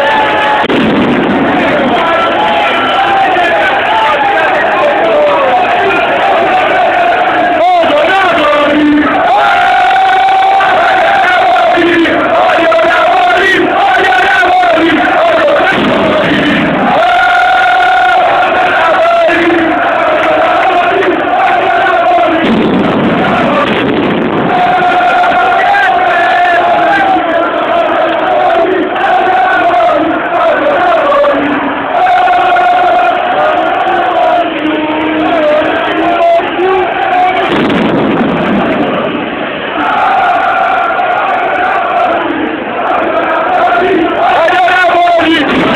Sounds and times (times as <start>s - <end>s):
Speech: 7.5s - 9.2s, 43.9s - 45.7s.